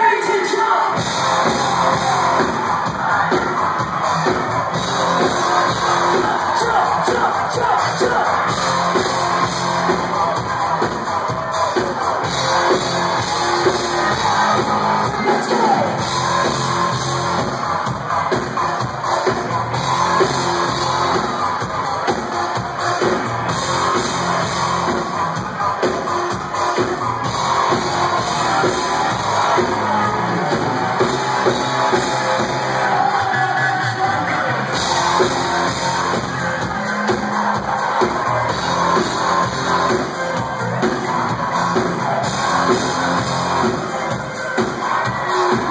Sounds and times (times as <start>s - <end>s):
Music: 0.0s - 45.7s.